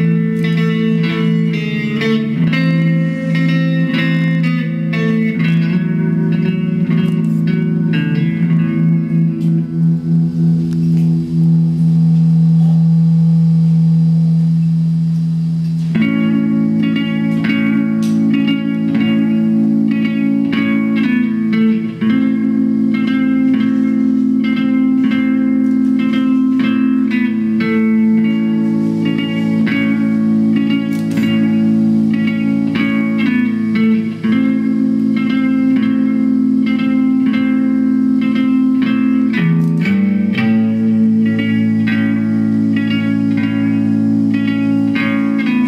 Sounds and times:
Music: 0.0s - 45.6s.

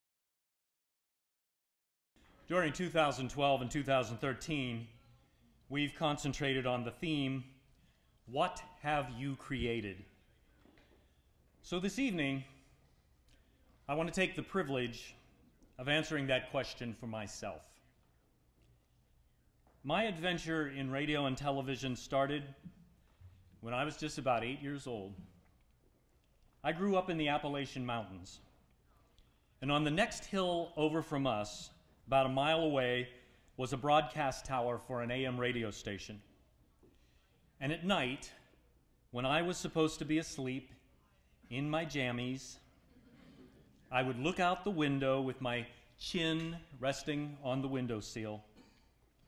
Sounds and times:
Narration, monologue: 2.2s - 49.2s
Male speech, man speaking: 2.4s - 10.3s, 11.6s - 12.7s, 13.9s - 17.9s, 19.8s - 22.7s, 23.6s - 25.3s, 26.6s - 28.5s, 29.6s - 36.4s, 37.6s - 38.5s, 39.1s - 42.7s, 43.9s - 48.6s.

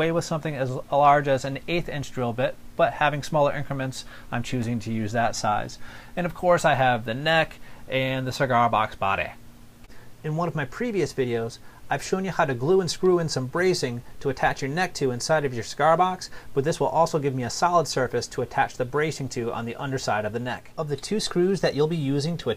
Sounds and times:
Speech: 0.0s - 9.4s, 10.2s - 22.5s.

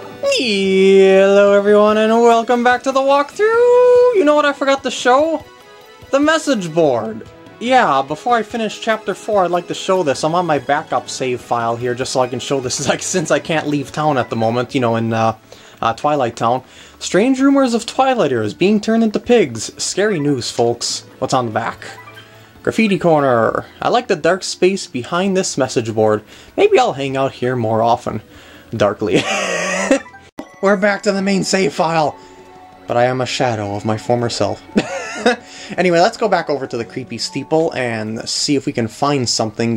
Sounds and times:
Music: 0.0s - 39.7s
Speech: 0.2s - 5.4s, 6.1s - 22.0s, 22.6s - 29.2s, 30.6s - 32.2s, 32.9s - 34.7s, 35.8s - 39.7s.

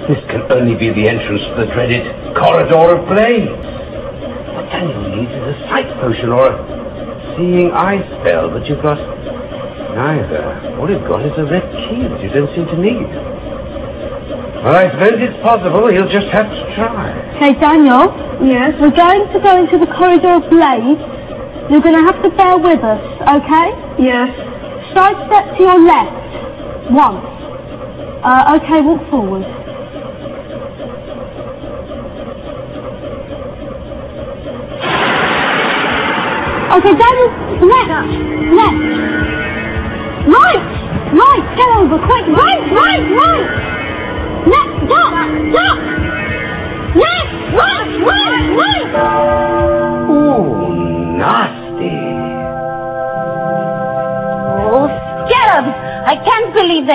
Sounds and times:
Music: 36.5s - 56.9s.

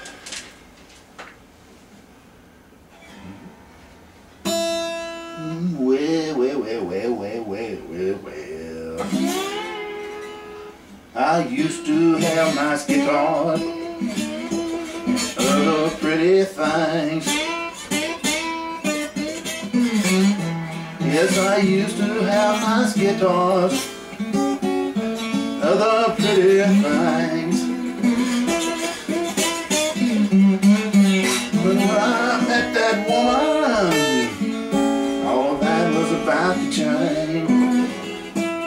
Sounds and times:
Strum: 2.9s - 38.6s.

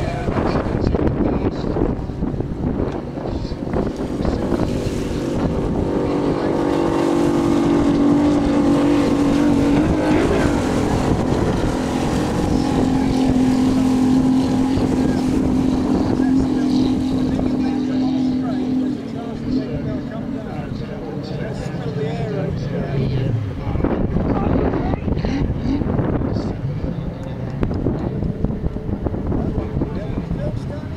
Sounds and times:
Speech: 0.0s - 2.2s, 9.8s - 10.6s, 12.3s - 27.6s, 29.3s - 30.9s
Motorboat, speedboat: 0.0s - 30.9s
Race car, auto racing: 0.0s - 30.9s.

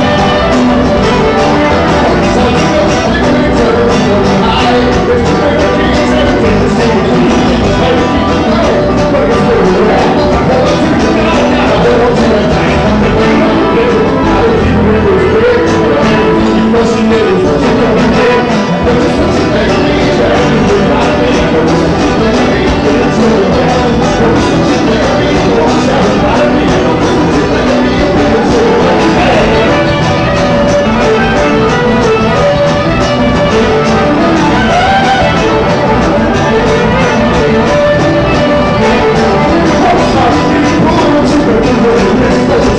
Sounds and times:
Music: 0.0s - 42.7s.

